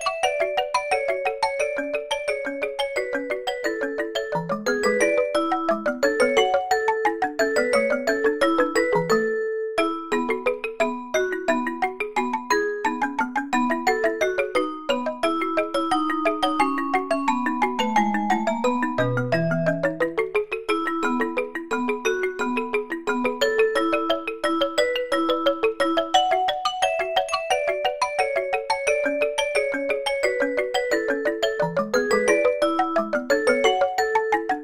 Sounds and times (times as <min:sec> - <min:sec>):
Marimba, xylophone: 0:00.0 - 0:34.6.